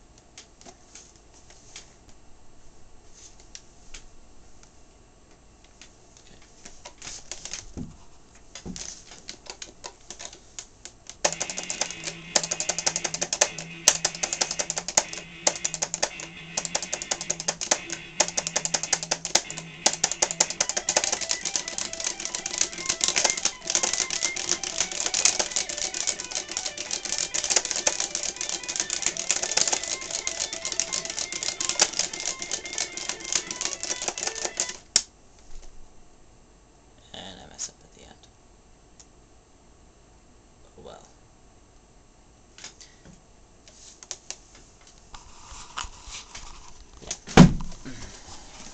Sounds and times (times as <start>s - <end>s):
Guitar: 11.2s - 34.8s.